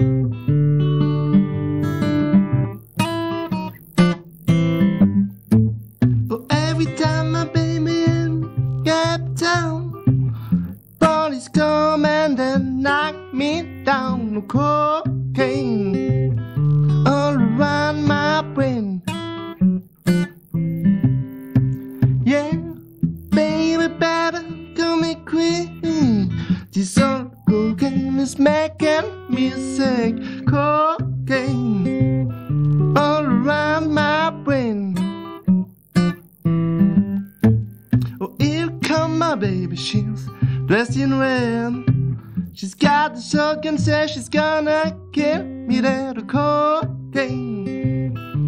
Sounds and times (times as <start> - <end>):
Blues: 0.0 - 48.4.